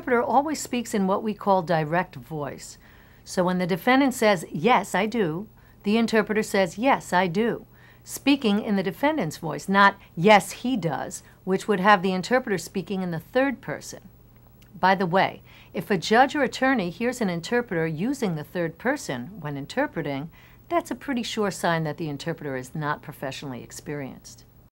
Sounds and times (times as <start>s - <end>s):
Female speech, woman speaking: 0.0s - 14.1s, 14.8s - 24.5s.